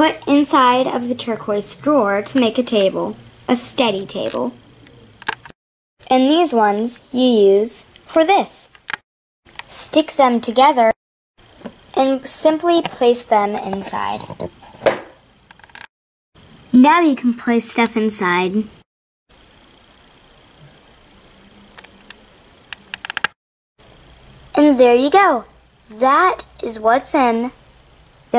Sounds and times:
Speech: 0.0 - 4.6, 6.1 - 8.7, 9.7 - 11.0, 12.0 - 14.4, 16.7 - 18.8, 24.6 - 27.6.

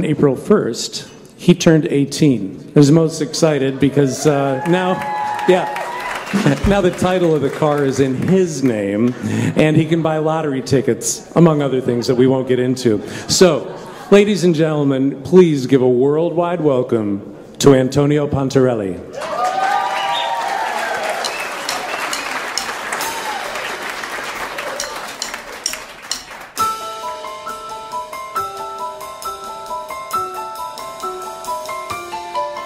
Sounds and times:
Speech: 0.0 - 5.8, 6.5 - 19.1.

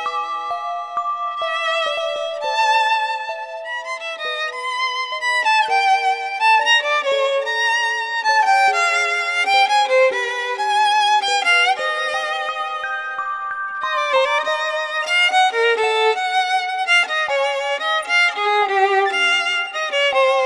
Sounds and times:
Violin, fiddle: 0.0 - 20.4.

